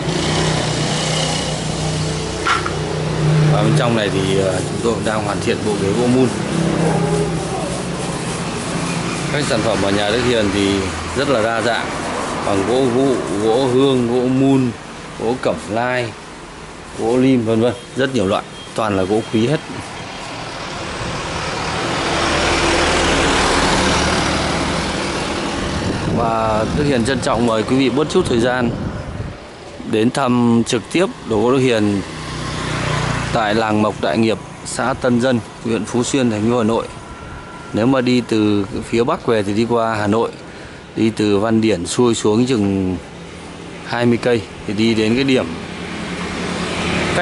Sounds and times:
Vehicle: 0:00.0 - 0:47.2
Speech: 0:03.5 - 0:06.4, 0:09.3 - 0:16.2, 0:17.0 - 0:19.8, 0:26.2 - 0:28.8, 0:29.8 - 0:32.1, 0:33.3 - 0:37.0, 0:37.7 - 0:40.4, 0:41.0 - 0:43.1, 0:43.8 - 0:45.6.

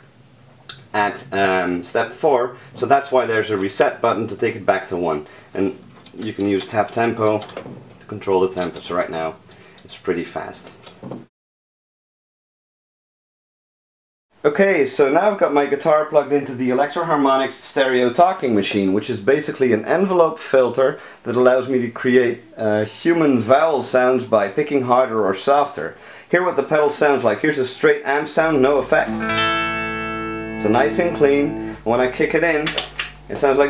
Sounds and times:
Speech: 0:00.7 - 0:10.8, 0:14.4 - 0:29.3, 0:30.6 - 0:33.7.

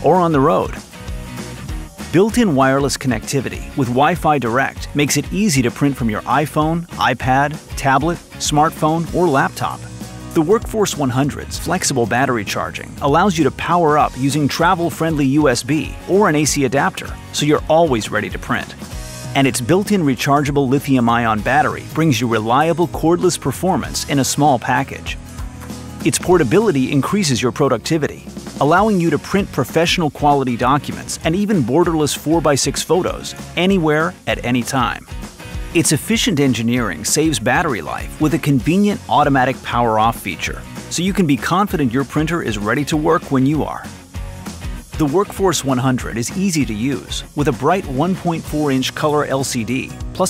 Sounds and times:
Speech: 0:00.0 - 0:00.8, 0:02.1 - 0:18.8, 0:19.4 - 0:25.2, 0:26.0 - 0:35.1, 0:35.8 - 0:43.9, 0:44.9 - 0:50.2
Music: 0:00.0 - 0:50.2.

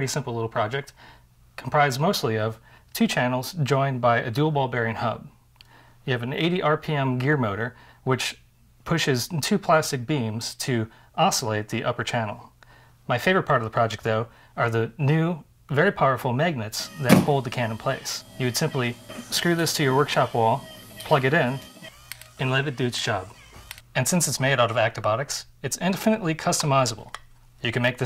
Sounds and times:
Speech: 0:00.0 - 0:01.0, 0:01.6 - 0:05.4, 0:06.1 - 0:12.5, 0:13.1 - 0:21.6, 0:22.4 - 0:23.4, 0:24.0 - 0:28.0.

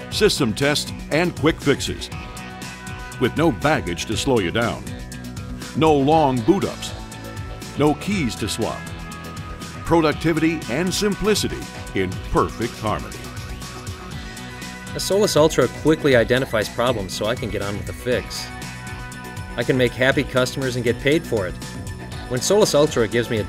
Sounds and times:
Music: 0:00.0 - 0:23.4
Speech: 0:00.1 - 0:02.1, 0:03.2 - 0:04.9, 0:05.8 - 0:07.0, 0:07.8 - 0:08.8, 0:09.9 - 0:13.2, 0:15.0 - 0:18.5, 0:19.6 - 0:21.6, 0:22.3 - 0:23.4.

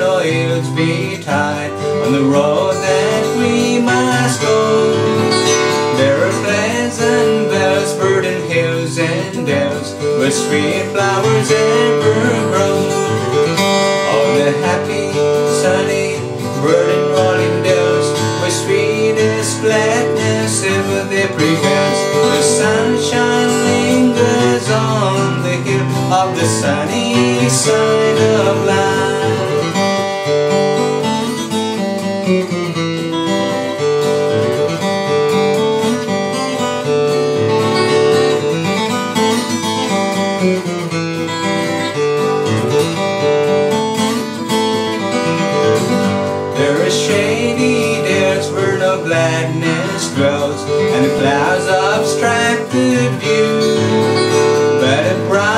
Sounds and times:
Male singing: 0:00.0 - 0:29.9, 0:46.6 - 0:55.5
Music: 0:00.0 - 0:55.5.

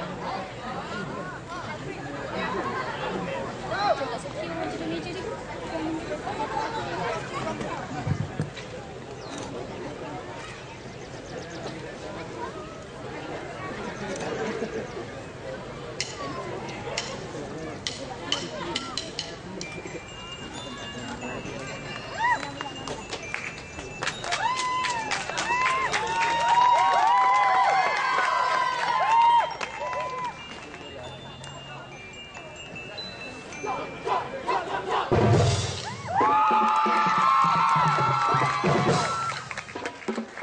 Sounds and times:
Marimba, xylophone: 0:17.8 - 0:25.1, 0:29.6 - 0:35.9
Glockenspiel: 0:18.8 - 0:24.9, 0:29.5 - 0:34.6.

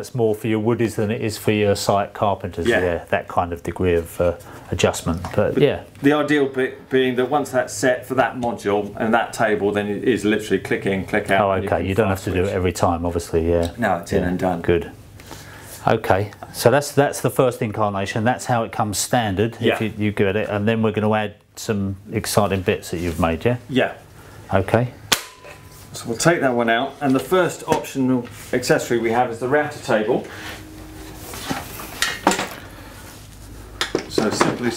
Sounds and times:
Speech: 0:00.0 - 0:15.0, 0:15.8 - 0:25.0, 0:25.9 - 0:30.3, 0:34.1 - 0:34.7.

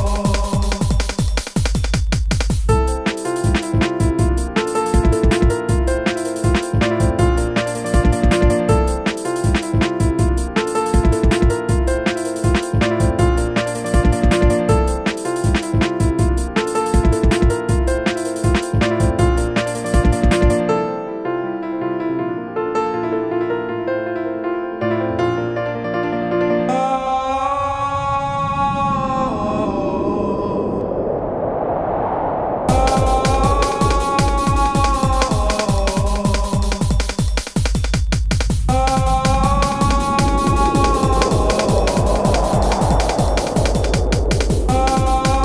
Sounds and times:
Music: 0:00.0 - 0:28.1, 0:32.7 - 0:45.4.

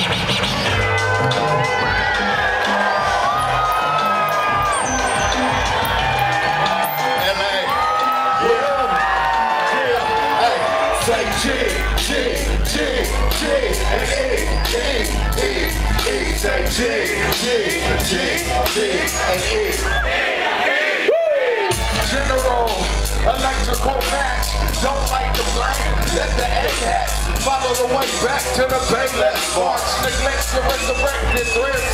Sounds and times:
Music: 0:00.0 - 0:31.9.

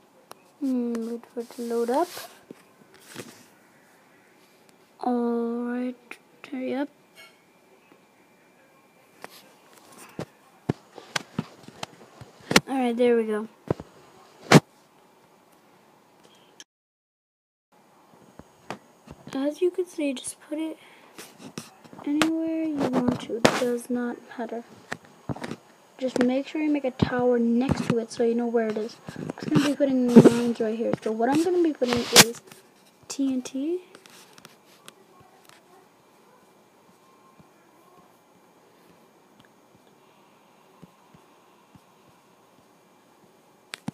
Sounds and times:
Speech: 0:00.6 - 0:02.3, 0:05.0 - 0:06.9, 0:12.6 - 0:13.6, 0:19.3 - 0:20.8, 0:21.7 - 0:24.7, 0:26.0 - 0:32.4, 0:33.1 - 0:33.9.

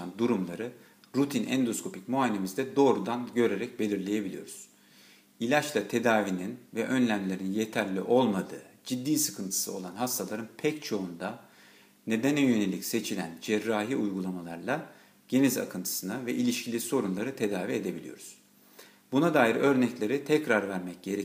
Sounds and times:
Speech: 0:00.0 - 0:04.7, 0:05.4 - 0:11.5, 0:12.1 - 0:18.4, 0:19.1 - 0:21.2.

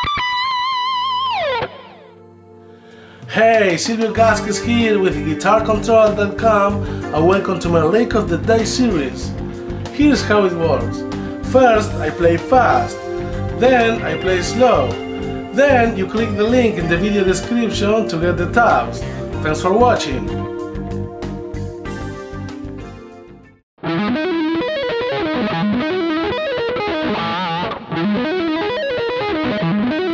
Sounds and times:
Electric guitar: 0:00.0 - 0:22.9, 0:23.8 - 0:30.1
Acoustic guitar: 0:02.8 - 0:22.9
Speech: 0:03.3 - 0:09.3, 0:09.9 - 0:13.0, 0:13.6 - 0:20.4.

